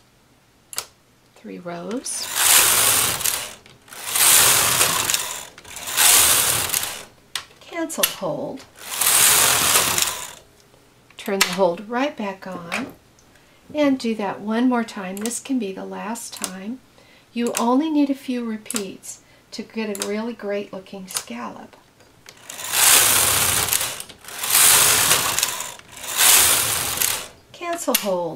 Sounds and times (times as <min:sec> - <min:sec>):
Gears: 0:02.2 - 0:07.1, 0:08.7 - 0:10.4, 0:22.3 - 0:27.4
Ratchet, pawl: 0:02.2 - 0:07.1, 0:08.8 - 0:10.4, 0:22.3 - 0:27.4.